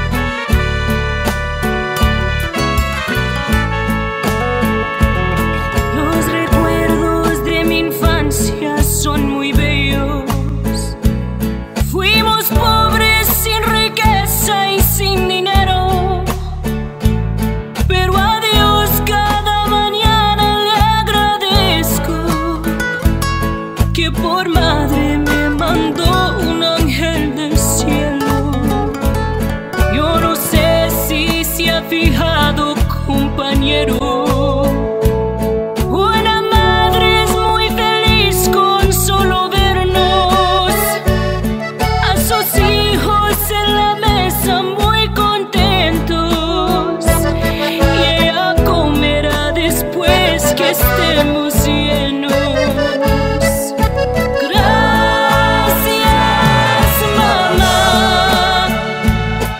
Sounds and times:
Music: 0.0s - 59.5s.

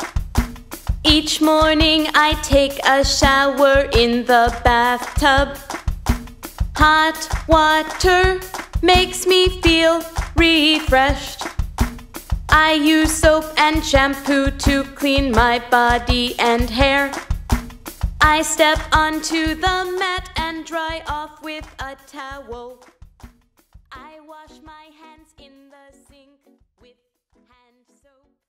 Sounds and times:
Music: 0.0s - 28.5s
Female singing: 1.1s - 5.7s, 6.8s - 11.4s, 12.5s - 17.2s, 18.2s - 22.8s, 24.0s - 28.4s.

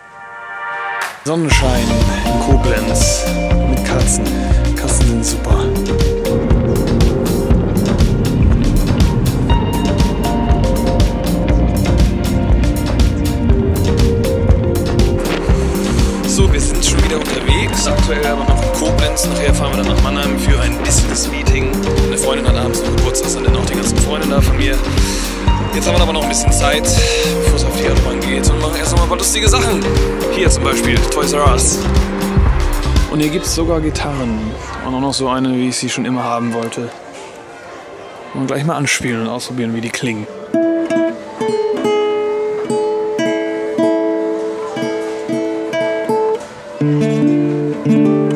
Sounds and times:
Guitar: 1.0s - 34.9s, 39.9s - 48.3s
Speech: 1.2s - 5.8s, 16.3s - 24.9s, 25.7s - 31.8s, 33.1s - 37.0s, 38.4s - 40.3s.

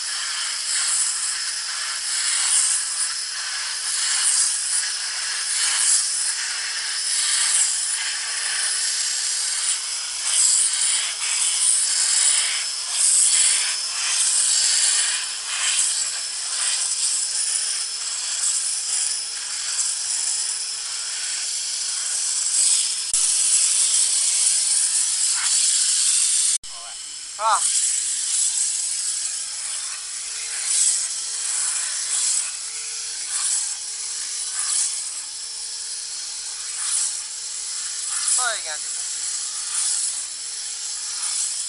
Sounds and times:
Vacuum cleaner: 0.0s - 41.6s.

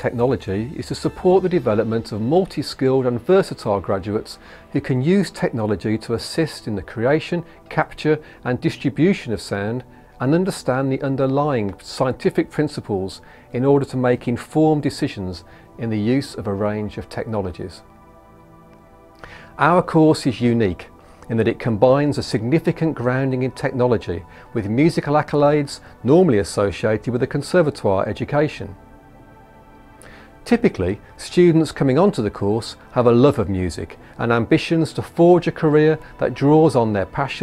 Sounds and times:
Speech: 0.0s - 17.8s, 19.6s - 28.8s, 30.5s - 37.4s
Music: 0.0s - 37.4s.

